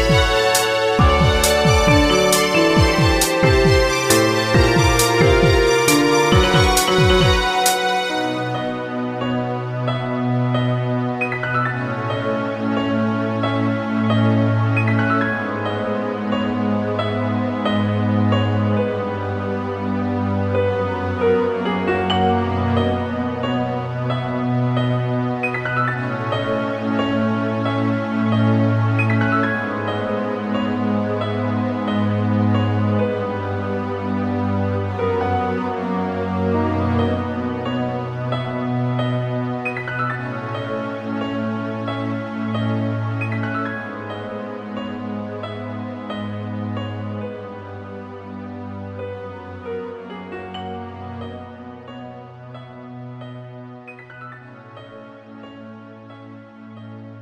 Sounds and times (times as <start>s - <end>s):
Background music: 0.0s - 57.2s.